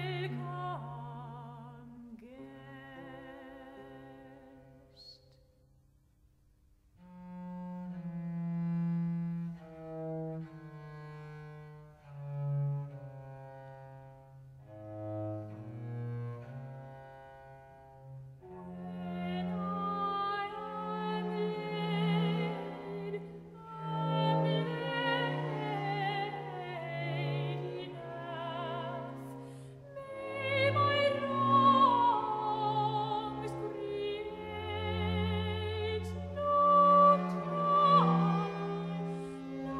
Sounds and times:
Opera: 0.0 - 5.4, 14.6 - 39.7.

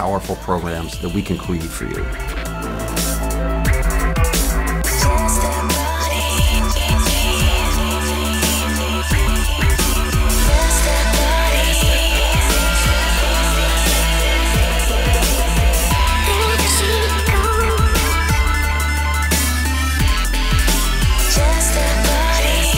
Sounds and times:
Drum and bass: 0.0 - 22.7.

